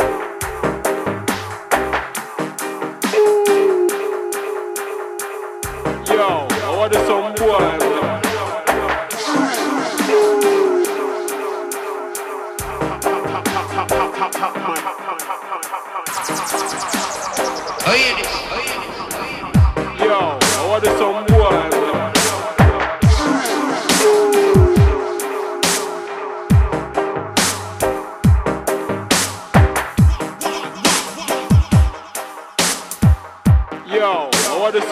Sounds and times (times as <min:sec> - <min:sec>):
Dubstep: 0:00.0 - 0:34.9.